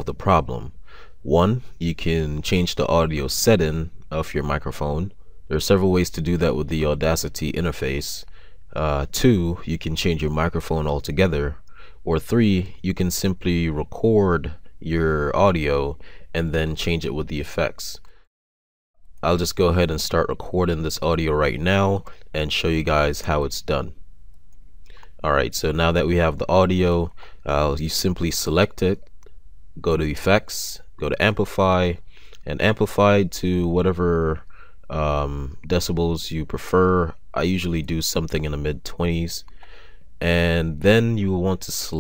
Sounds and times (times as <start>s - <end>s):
Speech: 0.0s - 18.1s, 19.2s - 24.0s, 25.2s - 29.1s, 29.8s - 39.5s, 40.2s - 42.0s.